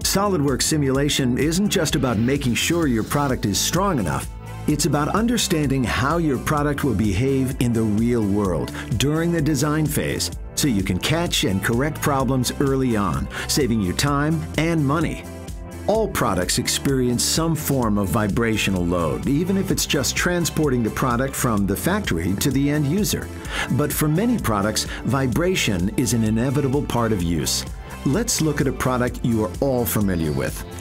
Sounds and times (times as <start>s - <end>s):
Speech: 0.0s - 15.2s, 15.9s - 30.8s
Music: 0.0s - 30.8s.